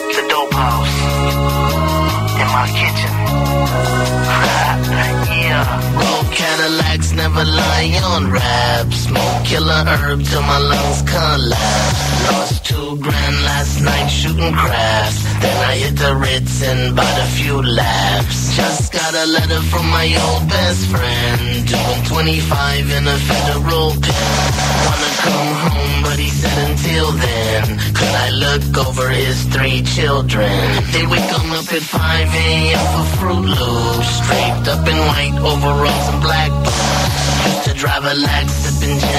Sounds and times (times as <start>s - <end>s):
Music: 0.0s - 39.1s.